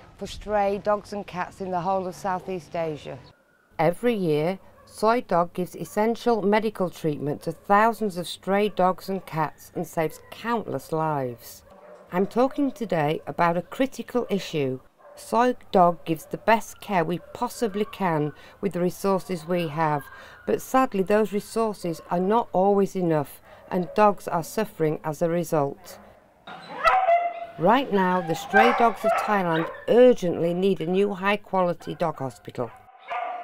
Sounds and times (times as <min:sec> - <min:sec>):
Speech: 0:00.2 - 0:26.0, 0:27.6 - 0:32.8
Bow-wow: 0:25.8 - 0:27.6, 0:32.8 - 0:33.4
Yip: 0:26.5 - 0:27.6, 0:33.0 - 0:33.4.